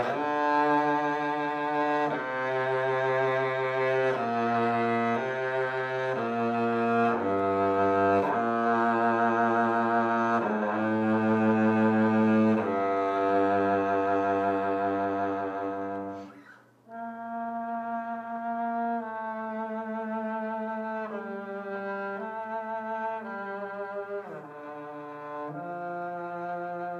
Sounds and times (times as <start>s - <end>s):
Double bass: 0.0s - 16.3s, 16.9s - 26.9s
Cello: 0.0s - 26.9s.